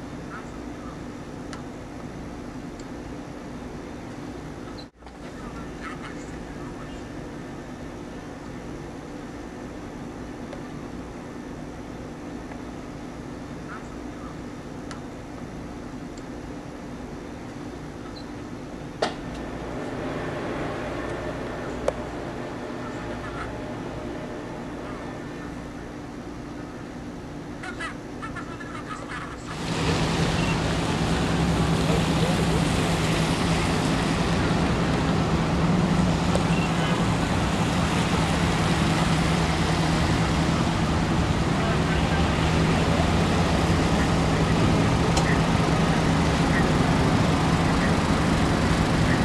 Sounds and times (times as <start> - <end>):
Speech: 5.2 - 7.2, 31.7 - 34.8, 41.4 - 49.2.